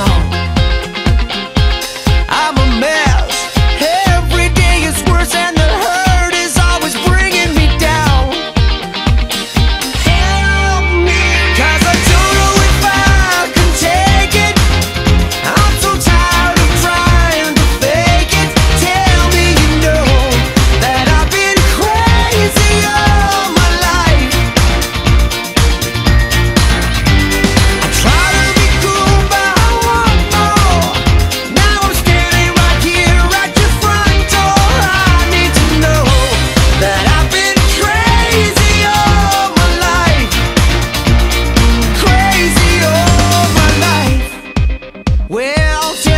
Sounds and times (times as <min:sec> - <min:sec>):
Music: 0:00.0 - 0:46.1.